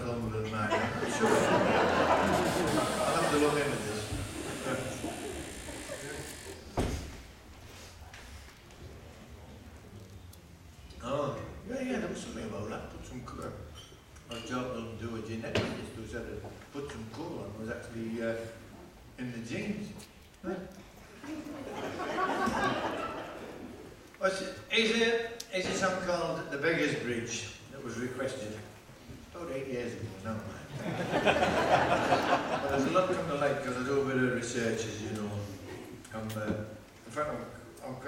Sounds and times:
Speech: 0:00.0 - 0:01.5, 0:02.8 - 0:05.3, 0:11.0 - 0:13.7, 0:14.3 - 0:18.6, 0:19.2 - 0:20.7, 0:24.2 - 0:28.8, 0:29.4 - 0:30.7, 0:32.6 - 0:38.0.

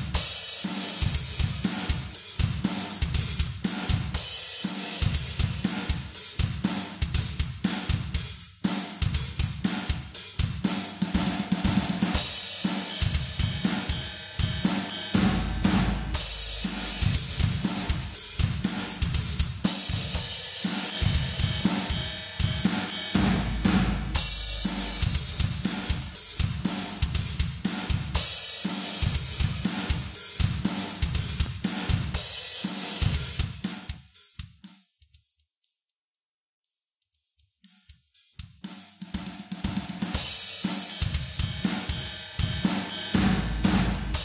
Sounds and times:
Hi-hat: 0:00.0 - 0:15.4, 0:16.1 - 0:35.6, 0:37.2 - 0:44.2.

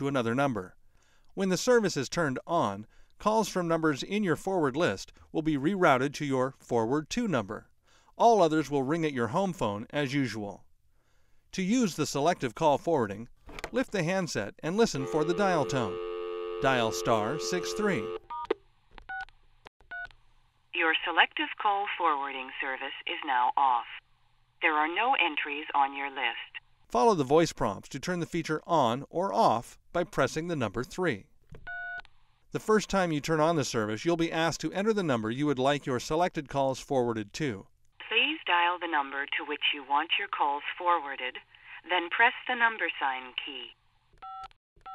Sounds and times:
Speech: 0:01.4 - 0:10.6, 0:11.6 - 0:16.0, 0:16.6 - 0:18.1, 0:20.8 - 0:24.0, 0:24.6 - 0:31.3, 0:32.6 - 0:43.8.

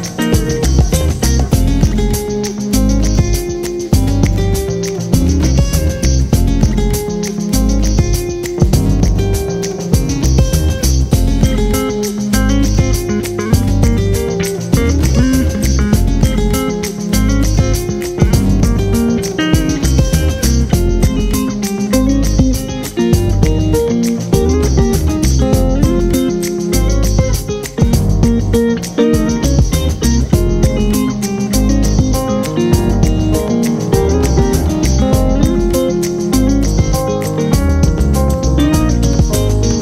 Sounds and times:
Music: 0:00.0 - 0:39.8.

